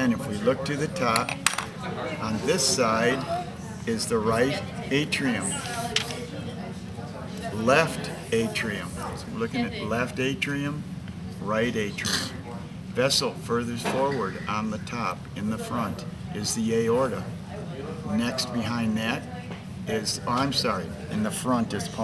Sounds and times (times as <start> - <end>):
Speech: 0.0 - 22.0.